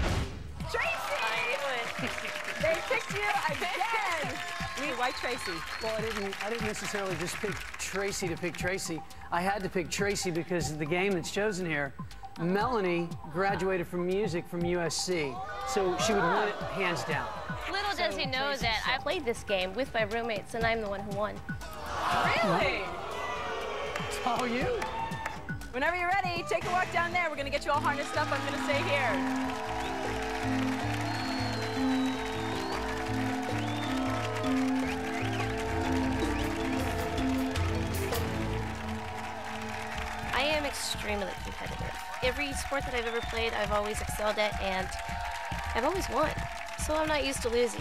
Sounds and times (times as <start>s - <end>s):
Music: 0.0s - 47.8s.